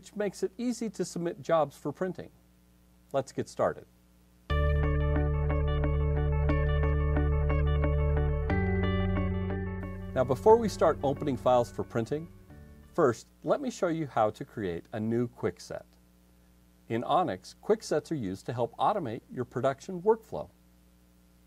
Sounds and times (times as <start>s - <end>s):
Speech: 0.0s - 2.4s, 3.1s - 3.9s, 10.2s - 12.3s, 13.0s - 16.0s, 16.9s - 20.6s
Music: 4.5s - 13.0s.